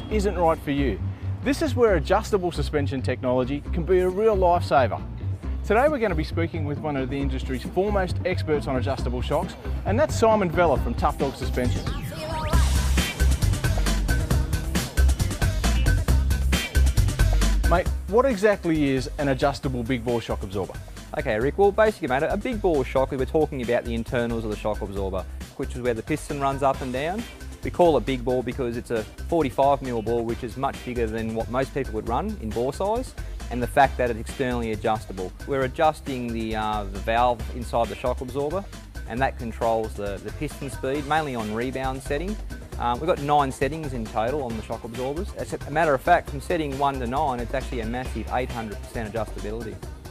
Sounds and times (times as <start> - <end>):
Speech: 0.0 - 5.0, 5.7 - 11.9, 17.7 - 49.8
Music: 0.0 - 50.1.